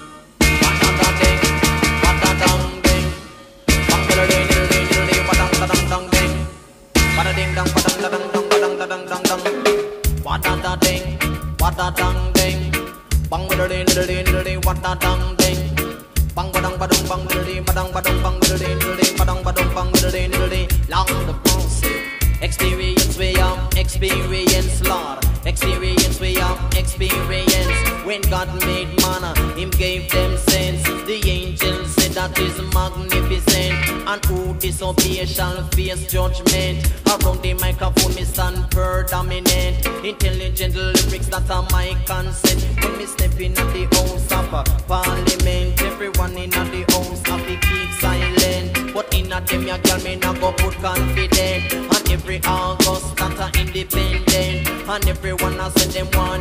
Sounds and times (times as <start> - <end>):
Reggae: 0.0 - 56.4.